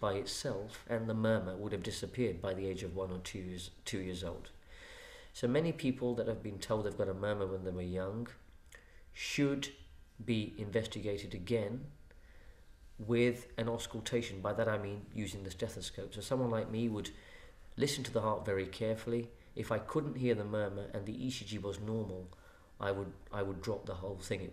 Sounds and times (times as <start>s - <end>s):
Speech: 0.0s - 4.6s, 5.4s - 8.4s, 9.2s - 12.0s, 13.0s - 17.2s, 17.8s - 24.5s.